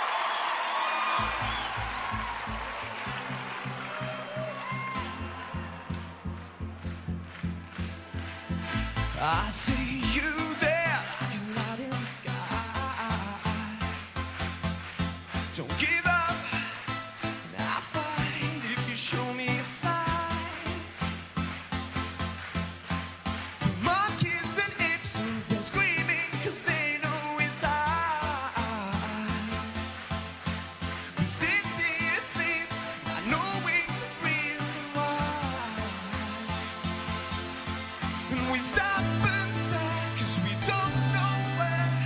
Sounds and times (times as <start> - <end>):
Dance music: 0.0 - 42.0
Exciting music: 1.0 - 42.0.